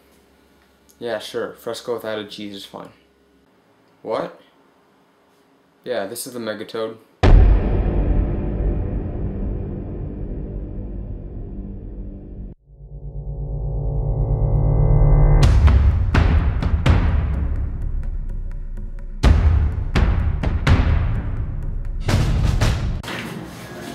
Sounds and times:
Music: 7.2 - 12.8, 13.7 - 23.0.

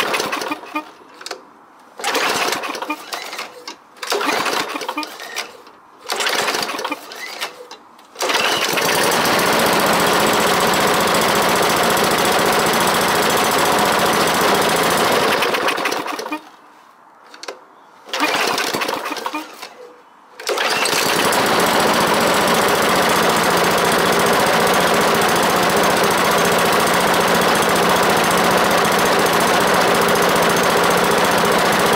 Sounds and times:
Lawn mower: 0.0 - 1.4, 2.0 - 16.5, 18.1 - 19.8, 20.4 - 31.9.

